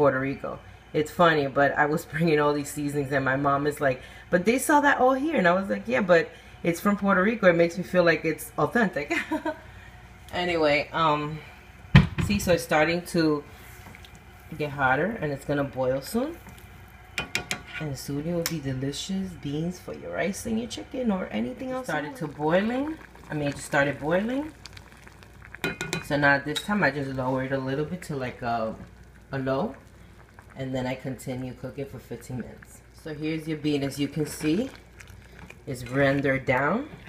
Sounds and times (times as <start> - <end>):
Speech: 17.8 - 24.5, 30.6 - 34.7, 35.7 - 36.9.